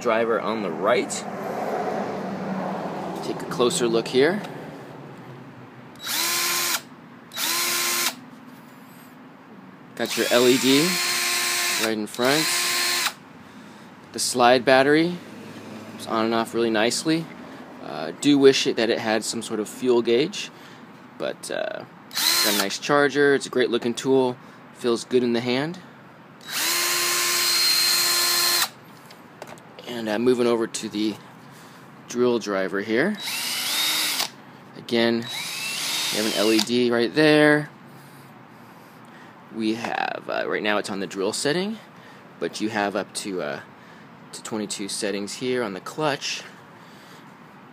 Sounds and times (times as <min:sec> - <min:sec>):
Speech: 0:00.0 - 0:01.3, 0:03.2 - 0:04.5, 0:10.0 - 0:11.0, 0:11.8 - 0:12.5, 0:14.1 - 0:15.2, 0:16.0 - 0:20.6, 0:21.2 - 0:25.9, 0:29.8 - 0:31.2, 0:32.1 - 0:33.2, 0:34.8 - 0:35.3, 0:36.2 - 0:37.7, 0:39.5 - 0:43.7, 0:44.3 - 0:46.5.